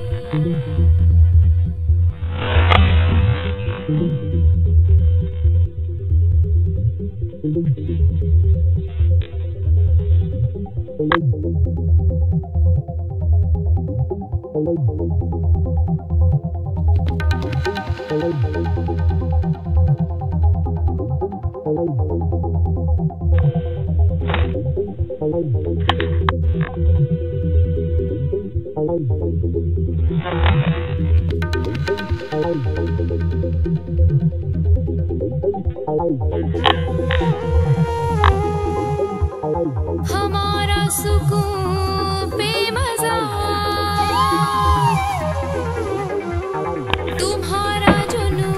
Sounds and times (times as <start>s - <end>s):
Throbbing: 0.0s - 42.5s, 43.6s - 48.5s.